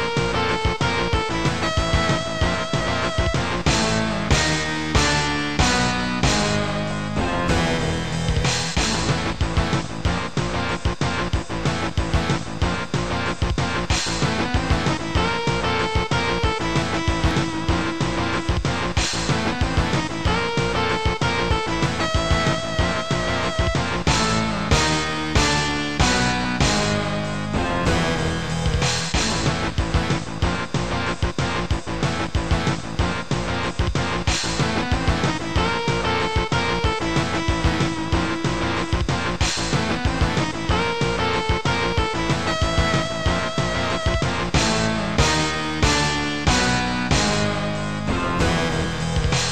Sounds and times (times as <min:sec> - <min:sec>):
Music: 0:00.0 - 0:49.5.